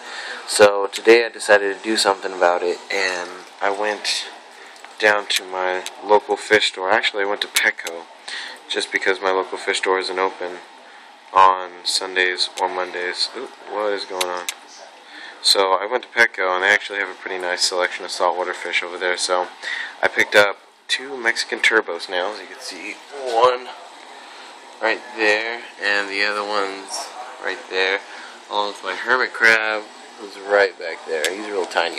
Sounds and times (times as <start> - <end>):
Speech: 0.2 - 4.4, 5.0 - 24.0, 24.6 - 31.9.